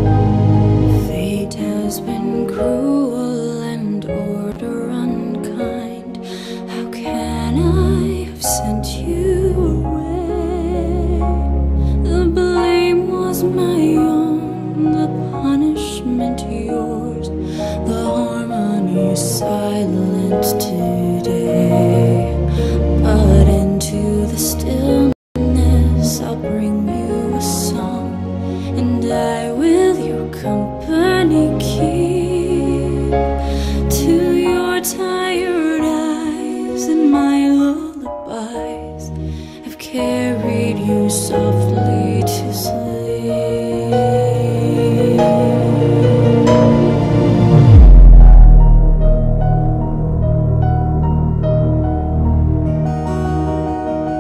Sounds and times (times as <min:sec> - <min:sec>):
Lullaby: 0:00.0 - 0:47.2.